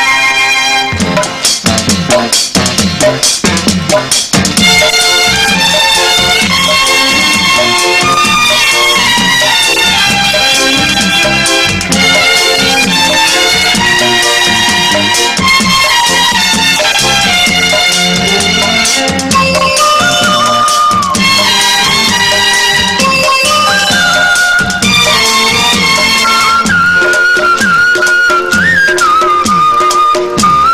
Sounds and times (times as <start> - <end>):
Theme music: 0.0 - 30.7.